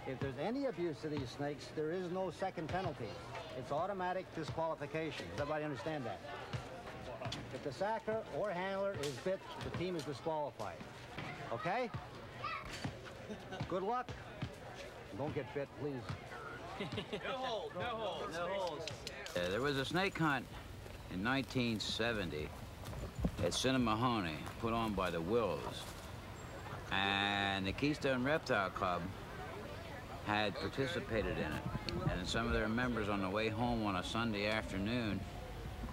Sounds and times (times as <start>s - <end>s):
Speech: 17.0s - 20.5s, 21.1s - 22.5s, 23.4s - 25.9s, 26.9s - 35.3s.